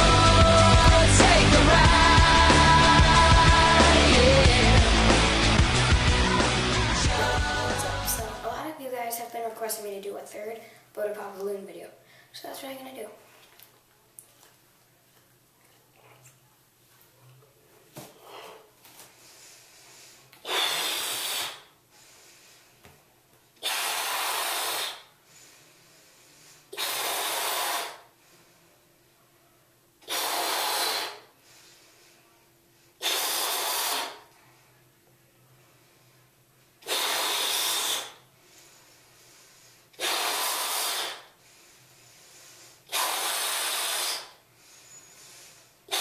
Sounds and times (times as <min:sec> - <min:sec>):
Inside, small room: 0:00.0 - 0:46.0.